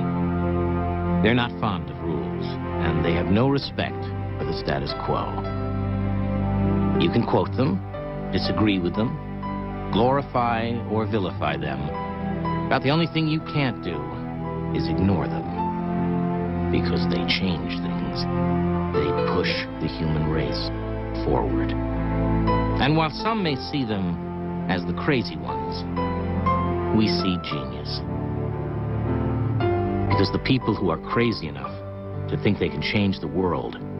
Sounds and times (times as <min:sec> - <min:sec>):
Music: 0:00.0 - 0:33.9
Speech: 0:01.2 - 0:05.4, 0:07.0 - 0:07.8, 0:08.4 - 0:09.2, 0:09.9 - 0:11.9, 0:12.7 - 0:14.2, 0:14.8 - 0:15.5, 0:16.7 - 0:18.3, 0:19.0 - 0:21.8, 0:22.8 - 0:25.8, 0:26.9 - 0:28.0, 0:30.1 - 0:33.8.